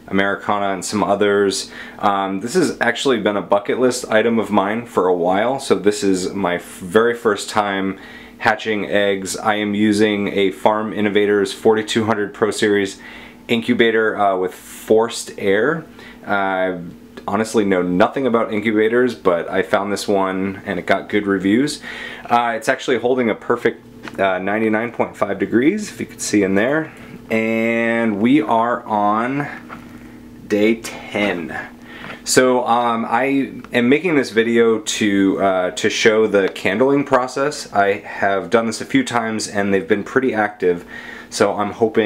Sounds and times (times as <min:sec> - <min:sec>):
Speech: 0:00.0 - 0:29.7, 0:30.4 - 0:42.0.